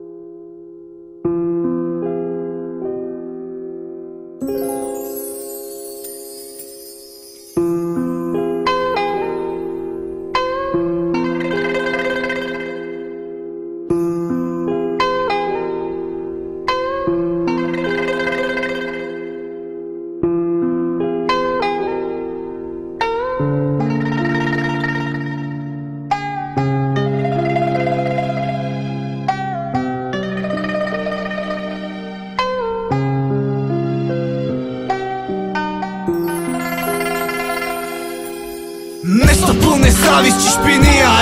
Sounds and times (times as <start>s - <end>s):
Tender music: 4.4s - 20.2s, 21.3s - 41.2s.